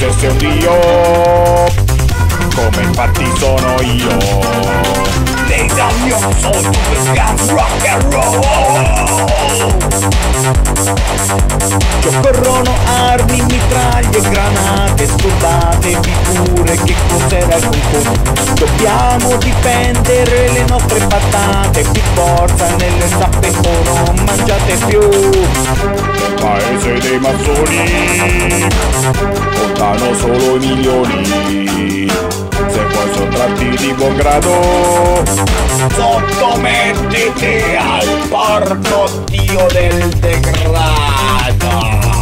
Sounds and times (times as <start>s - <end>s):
Music: 0.0s - 42.2s.